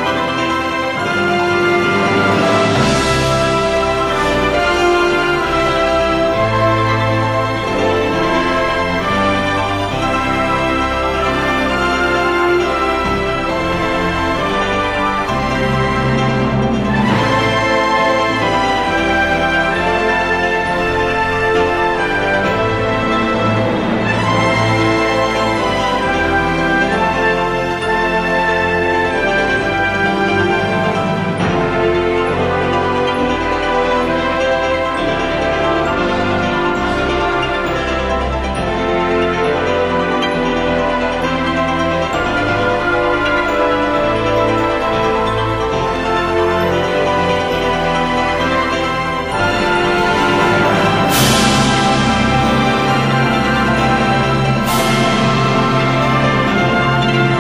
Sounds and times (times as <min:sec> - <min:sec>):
Theme music: 0:00.0 - 0:57.4.